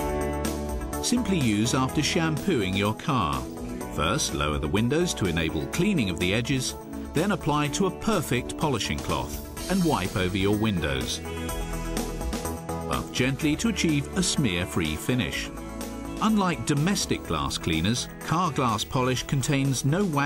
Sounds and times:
Music: 0.0s - 20.2s
Speech: 1.0s - 11.3s, 12.9s - 15.5s, 16.2s - 20.2s.

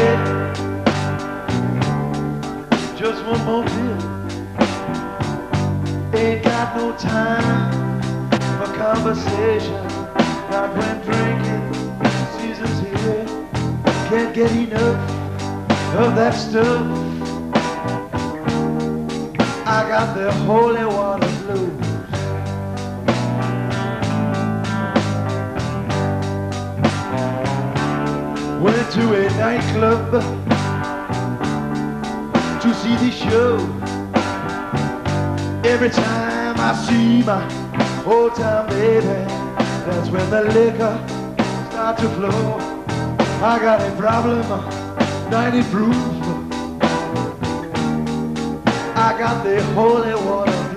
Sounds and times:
Blues: 0.0s - 50.7s.

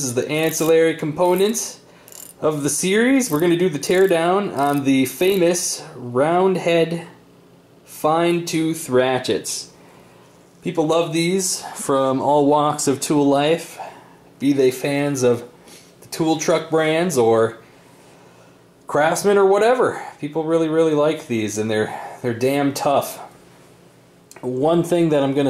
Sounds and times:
Speech: 0.0s - 1.8s, 2.4s - 7.2s, 7.9s - 9.8s, 10.6s - 13.8s, 14.4s - 17.6s, 18.9s - 23.3s, 24.3s - 25.4s.

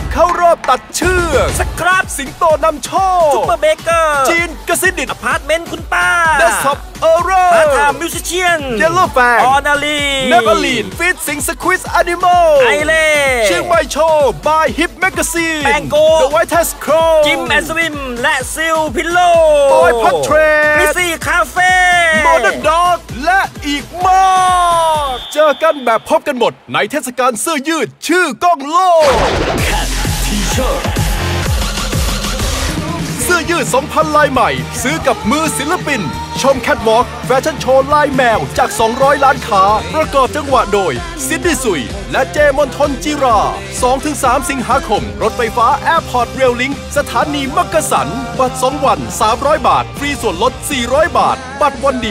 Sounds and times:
Music: 0.0s - 28.1s, 29.0s - 52.1s
Speech: 0.0s - 30.9s, 32.8s - 52.1s.

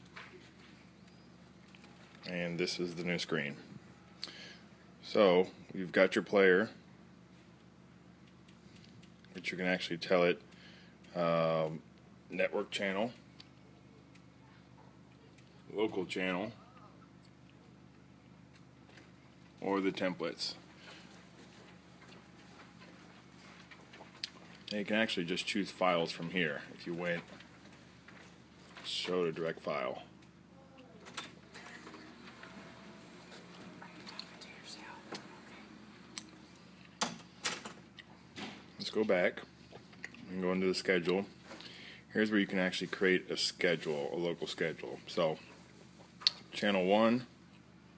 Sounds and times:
Inside, small room: 0.0s - 47.9s
Speech: 2.2s - 3.6s, 5.0s - 6.8s, 9.3s - 10.4s, 11.1s - 13.2s, 15.7s - 16.7s, 19.6s - 20.6s, 24.7s - 27.3s, 28.8s - 31.0s, 38.8s - 39.5s, 40.2s - 41.3s, 42.1s - 45.5s, 46.6s - 47.3s.

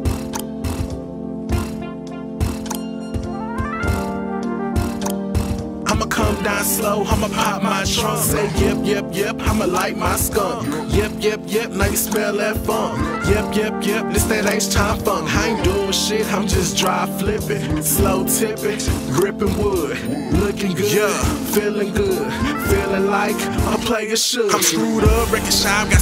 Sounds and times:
Rhythm and blues: 0.0s - 26.0s.

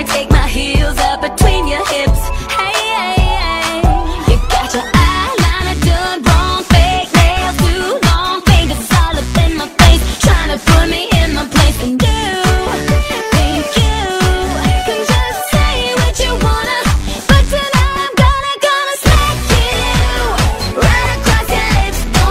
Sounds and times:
Music: 0.0s - 22.3s.

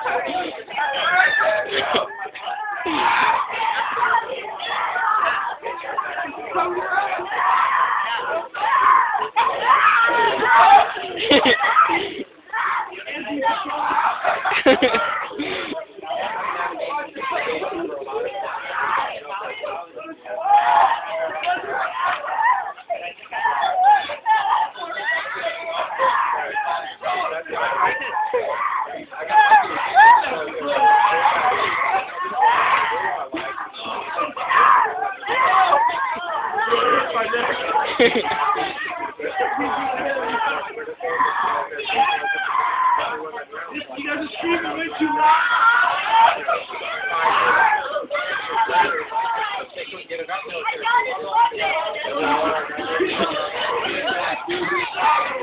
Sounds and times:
Speech: 0.0s - 55.4s.

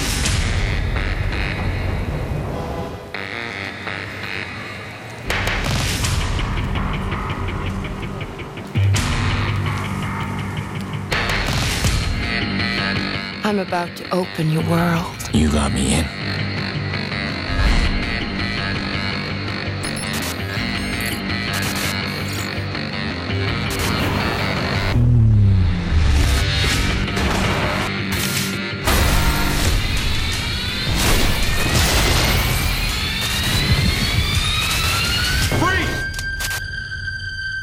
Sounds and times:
Music: 0.0s - 37.6s.

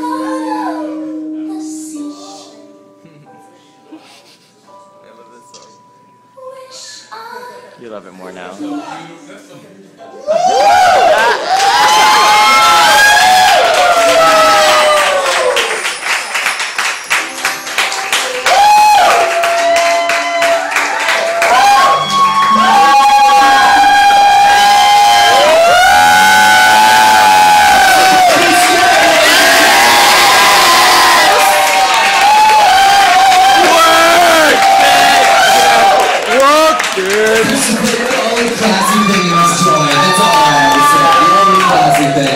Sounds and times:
Inside, large room or hall: 0.0s - 42.3s.

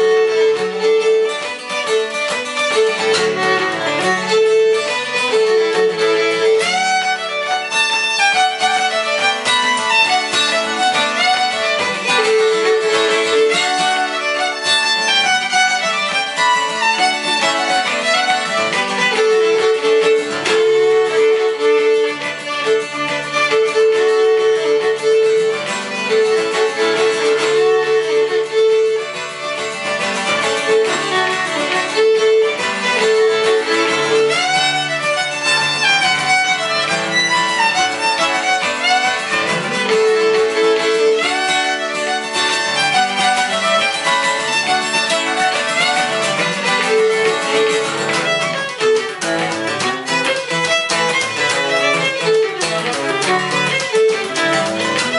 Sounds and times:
Acoustic guitar: 0.0s - 55.1s
Violin, fiddle: 0.0s - 55.1s.

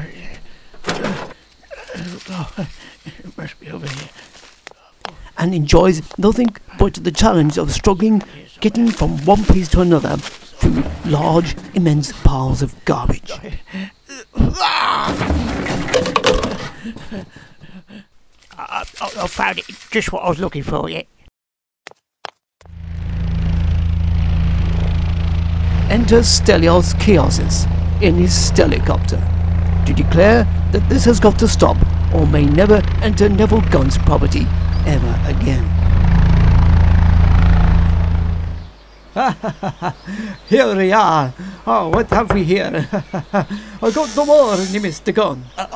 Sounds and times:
Speech: 0.0s - 0.4s, 1.9s - 4.1s, 5.4s - 14.8s, 18.6s - 21.1s, 25.9s - 29.3s, 29.9s - 35.7s, 40.5s - 42.9s, 43.8s - 45.7s.

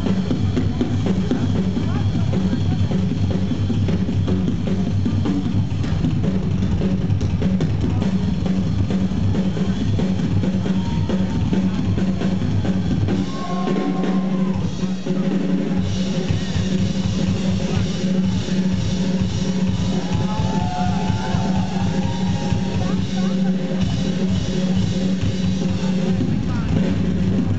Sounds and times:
Bass drum: 0.0s - 27.5s
Drum kit: 0.0s - 27.5s.

